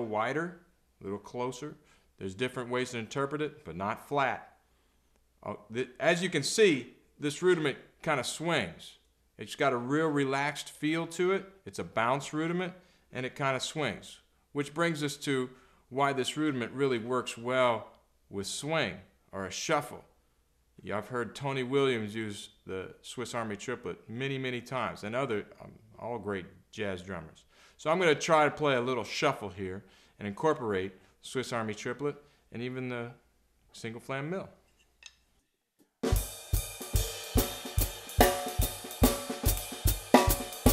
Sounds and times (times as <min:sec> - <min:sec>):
Speech: 0:00.0 - 0:04.6, 0:05.4 - 0:20.2, 0:20.8 - 0:34.6
Drum kit: 0:36.0 - 0:40.7
Bass drum: 0:36.1 - 0:40.7
Cymbal: 0:36.1 - 0:40.7
Snare drum: 0:36.1 - 0:40.7.